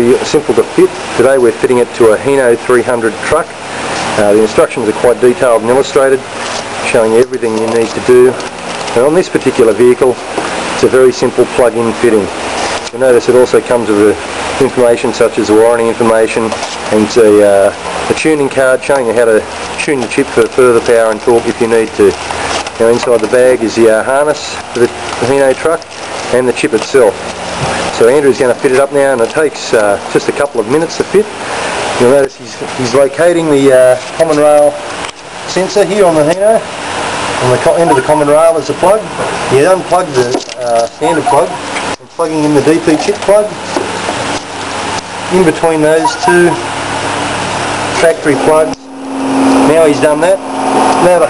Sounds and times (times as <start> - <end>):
Speech: 0.0 - 3.5, 4.2 - 8.4, 9.0 - 10.2, 10.8 - 12.3, 12.9 - 22.2, 22.8 - 27.2, 28.0 - 31.3, 32.0 - 34.8, 35.5 - 36.7, 37.4 - 43.6, 45.3 - 46.7, 48.0 - 48.9, 49.6 - 50.4, 51.0 - 51.2.